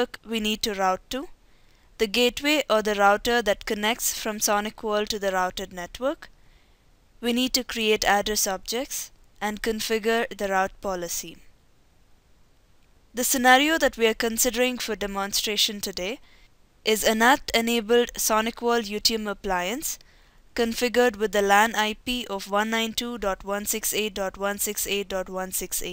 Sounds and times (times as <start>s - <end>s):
Speech: 0.0s - 1.3s, 2.0s - 6.3s, 7.2s - 11.4s, 13.2s - 16.2s, 16.9s - 20.0s, 20.6s - 25.9s.